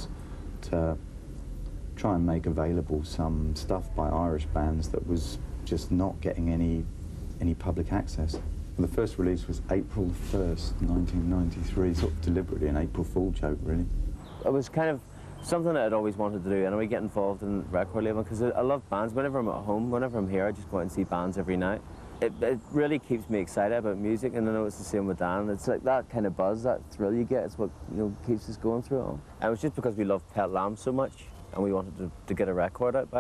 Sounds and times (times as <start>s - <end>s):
Speech: 0.0s - 1.0s, 2.0s - 33.2s.